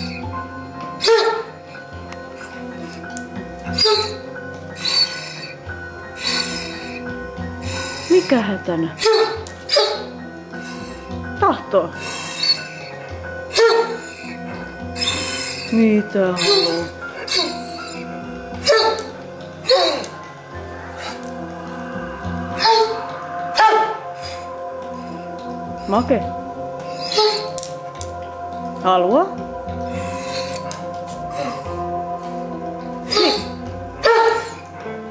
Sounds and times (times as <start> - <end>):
Music: 0.0 - 35.1
Dog: 0.9 - 1.8, 3.7 - 4.2, 9.0 - 10.9, 12.0 - 15.7, 16.4 - 20.2, 22.5 - 25.1, 26.8 - 27.6, 33.0 - 34.6
Speech: 11.4 - 11.9, 15.7 - 16.9, 25.9 - 26.3, 28.8 - 29.4.